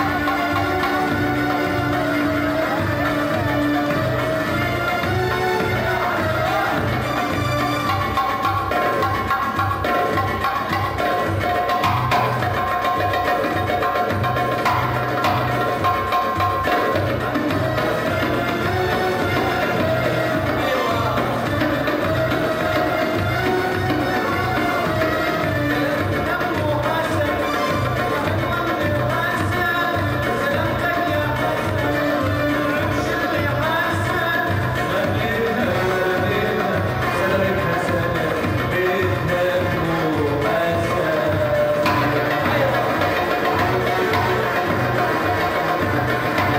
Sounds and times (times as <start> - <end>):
Music: 0.0 - 46.5.